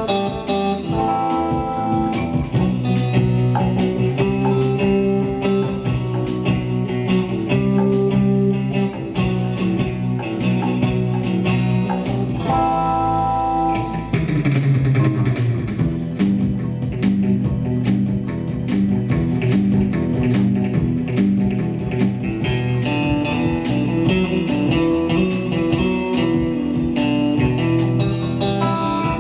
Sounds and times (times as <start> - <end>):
Electric guitar: 0.0 - 29.2.